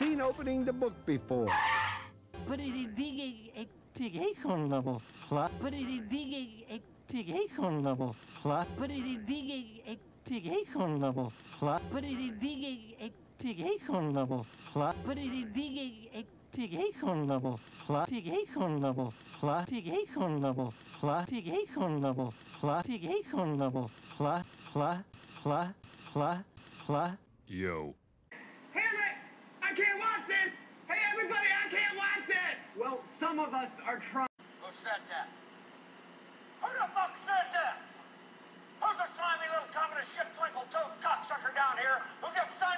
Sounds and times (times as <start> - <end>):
Speech: 2.5 - 28.0, 38.8 - 42.7.